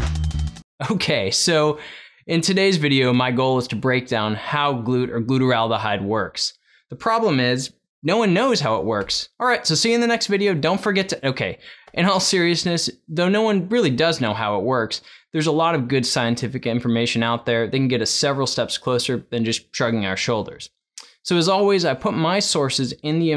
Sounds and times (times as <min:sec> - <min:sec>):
Speech: 0:00.8 - 0:23.3.